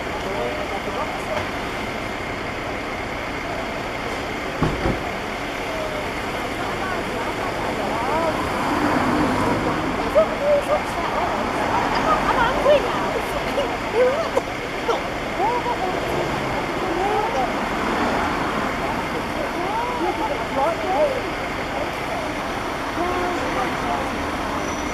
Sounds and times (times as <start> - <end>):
Speech: 0.0 - 1.7, 5.6 - 24.6.